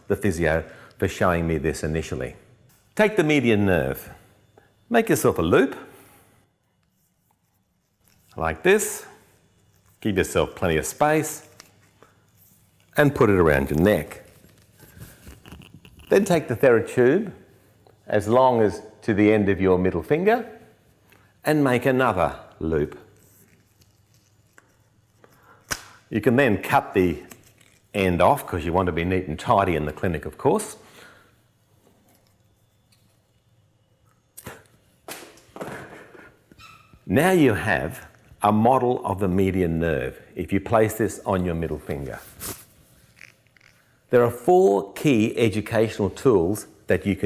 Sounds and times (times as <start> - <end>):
Speech: 0.0 - 2.4, 3.0 - 4.2, 4.9 - 5.9, 8.4 - 9.2, 10.0 - 11.5, 13.0 - 14.3, 16.1 - 17.4, 18.1 - 20.6, 21.4 - 23.1, 26.1 - 27.3, 27.9 - 30.8, 37.1 - 42.3, 44.1 - 47.2.